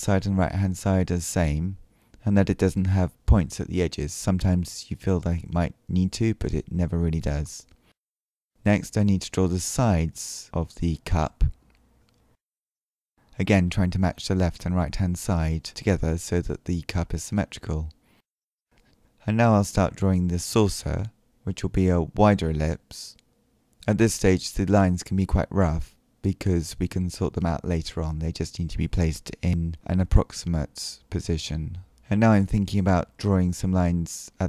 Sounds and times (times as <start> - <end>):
Speech: 0.0 - 7.8, 8.6 - 11.6, 13.4 - 18.0, 19.2 - 23.2, 23.8 - 34.4.